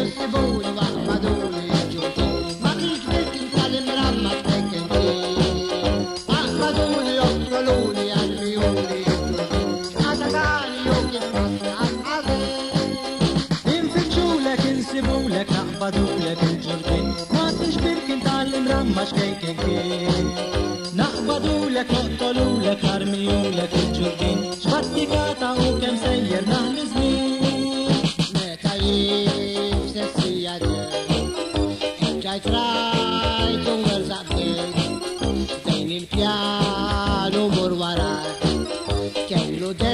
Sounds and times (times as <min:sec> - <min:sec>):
Music: 0:00.0 - 0:39.9.